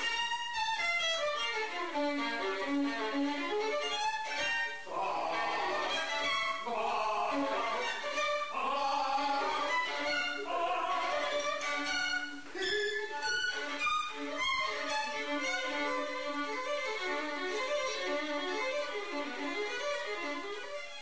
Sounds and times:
Violin, fiddle: 0.0s - 21.0s
Traditional music: 4.8s - 16.3s.

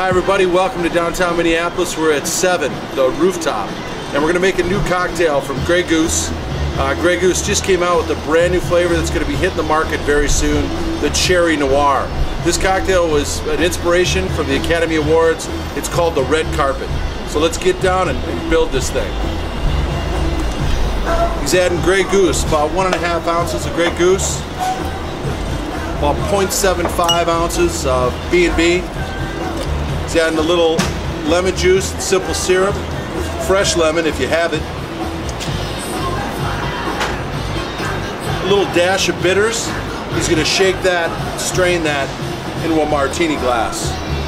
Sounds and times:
Speech: 0.0s - 19.2s, 21.4s - 24.4s, 26.0s - 28.9s, 30.1s - 32.8s, 33.4s - 34.6s, 38.4s - 44.0s
Music: 0.0s - 44.2s.

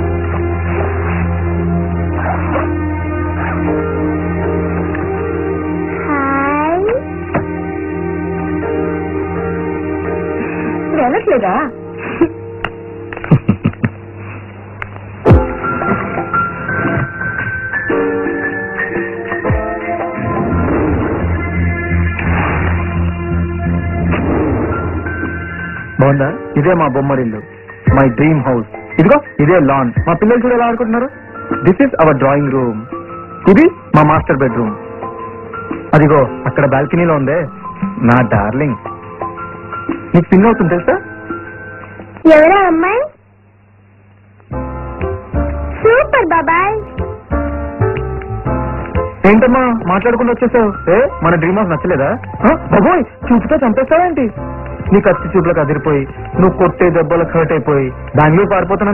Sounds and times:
Music: 0.0s - 43.2s, 44.2s - 58.9s.

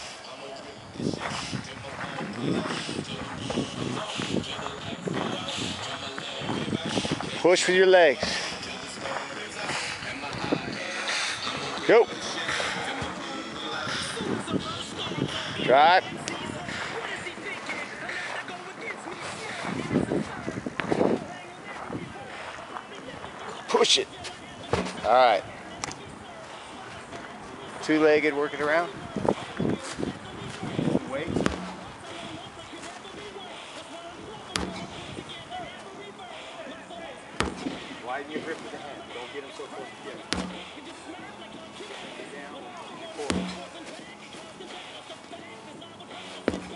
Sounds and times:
Music: 0.0s - 46.7s
Speech: 4.6s - 8.4s, 23.1s - 24.2s, 25.0s - 25.5s, 38.0s - 40.3s.

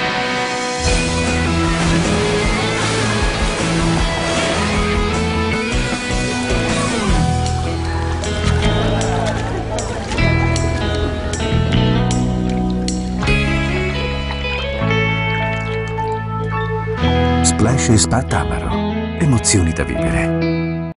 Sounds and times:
Music: 0.0s - 20.9s.

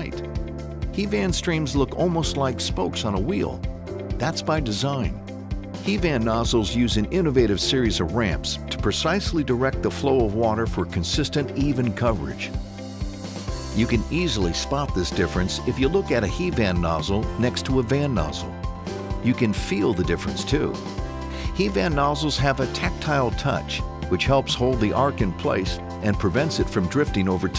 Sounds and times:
Speech: 0.0s - 0.2s, 1.0s - 3.6s, 4.2s - 5.2s, 5.8s - 12.6s, 13.8s - 18.5s, 19.2s - 20.8s, 21.5s - 27.5s
Music: 0.0s - 27.5s.

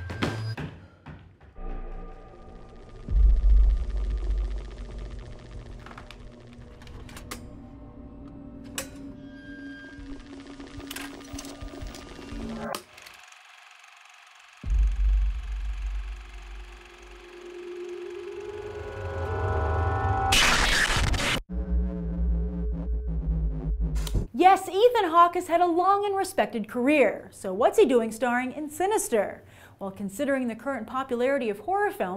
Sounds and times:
Music: 1.6s - 12.7s, 14.7s - 20.2s, 21.5s - 24.3s
Speech: 24.4s - 32.1s.

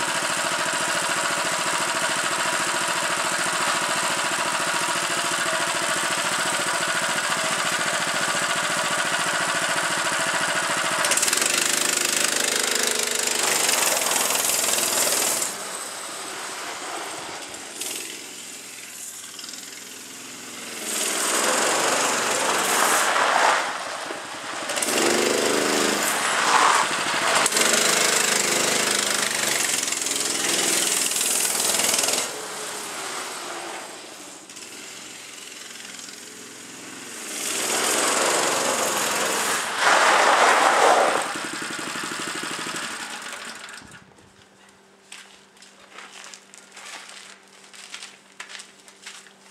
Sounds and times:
Vehicle: 0.0s - 49.3s.

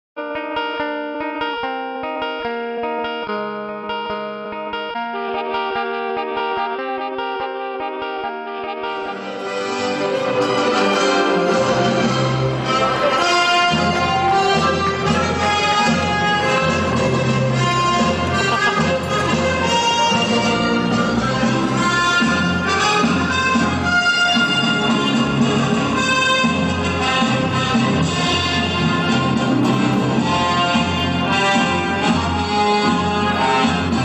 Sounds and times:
Effects unit: 0.2s - 34.0s
Music: 0.2s - 34.0s.

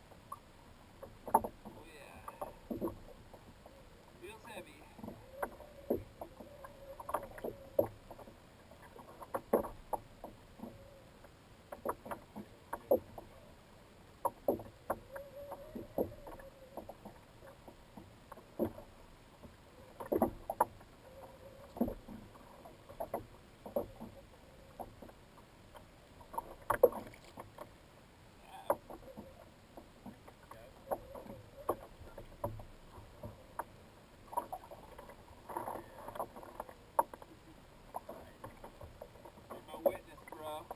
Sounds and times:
Rowboat, canoe, kayak: 0.0s - 40.7s
Speech: 1.8s - 2.4s, 4.2s - 5.0s, 39.6s - 40.7s.

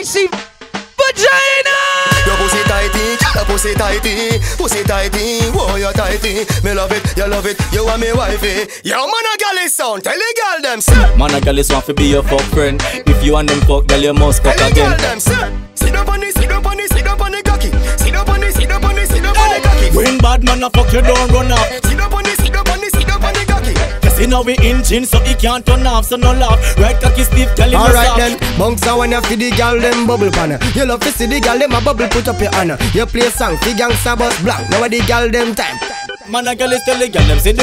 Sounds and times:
Speech: 0.0s - 0.4s, 8.9s - 11.0s, 27.7s - 28.4s
Music: 0.0s - 8.8s, 10.8s - 37.6s.

